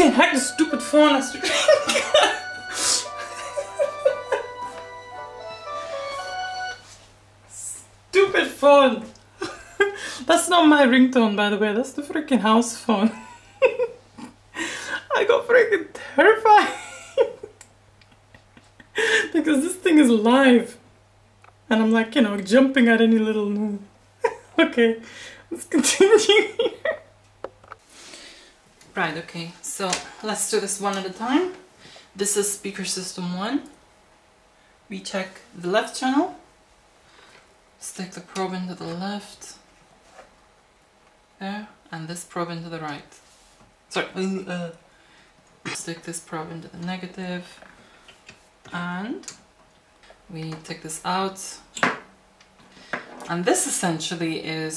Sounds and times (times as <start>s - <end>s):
Speech: 0.0s - 1.5s, 7.6s - 9.2s, 10.2s - 13.2s, 15.1s - 16.8s, 19.3s - 20.8s, 21.7s - 23.9s, 24.6s - 26.6s, 28.9s - 31.6s, 32.2s - 33.8s, 34.9s - 36.4s, 37.8s - 39.6s, 41.4s - 43.2s, 43.9s - 44.8s, 45.7s - 47.6s, 48.7s - 49.4s, 50.3s - 51.7s, 53.3s - 54.7s.